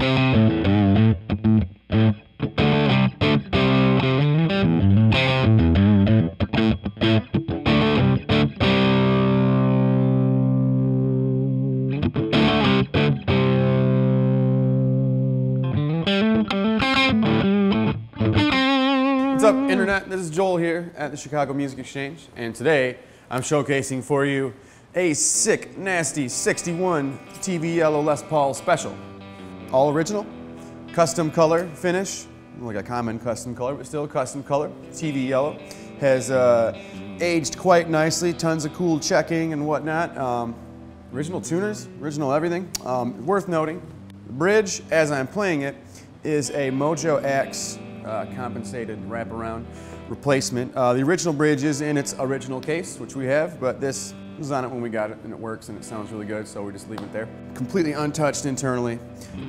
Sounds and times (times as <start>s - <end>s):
Bass guitar: 0.0s - 20.1s, 26.3s - 59.4s.